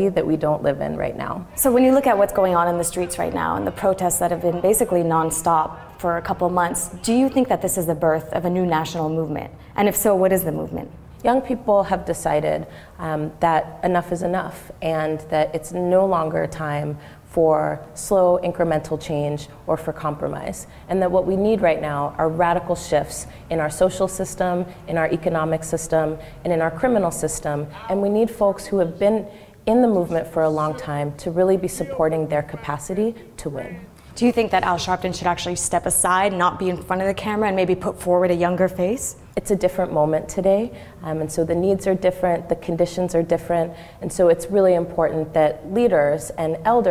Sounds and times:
Female speech, woman speaking: 0:00.0 - 0:46.9.

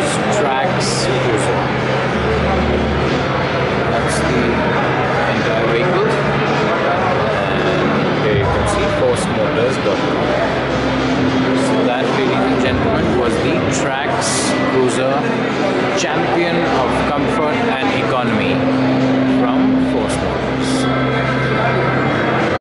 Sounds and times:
Speech: 0:00.0 - 0:01.8, 0:03.8 - 0:10.7, 0:11.5 - 0:22.6.

